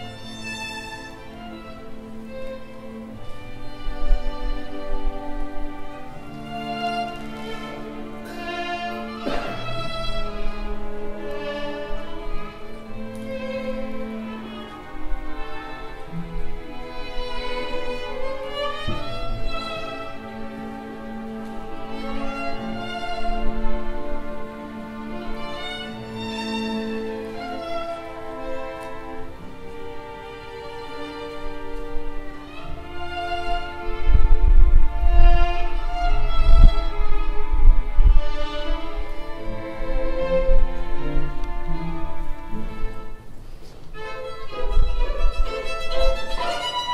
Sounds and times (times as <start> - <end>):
Violin, fiddle: 0.0 - 46.9.